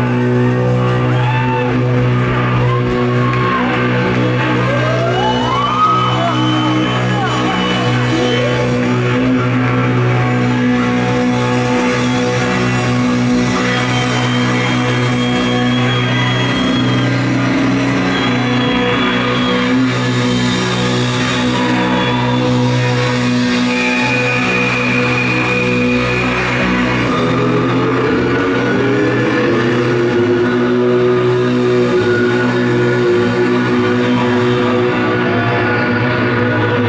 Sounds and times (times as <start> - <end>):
Music: 0.0 - 36.8.